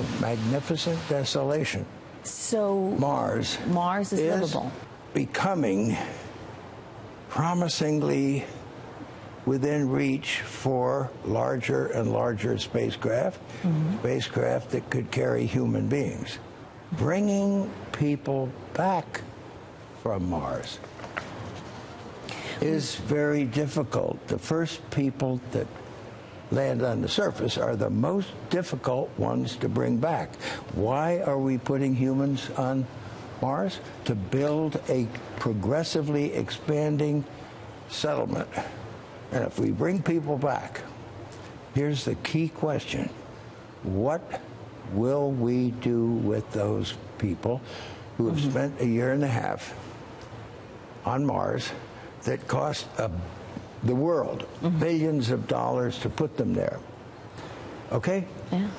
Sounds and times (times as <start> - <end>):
Speech: 0.0 - 1.9, 3.2 - 6.1, 7.3 - 8.5, 9.5 - 19.2, 22.6 - 25.7, 26.5 - 37.3, 37.9 - 38.7, 39.3 - 40.9, 41.8 - 43.2, 43.9 - 47.6, 48.2 - 49.8, 51.1 - 56.9, 57.9 - 58.7.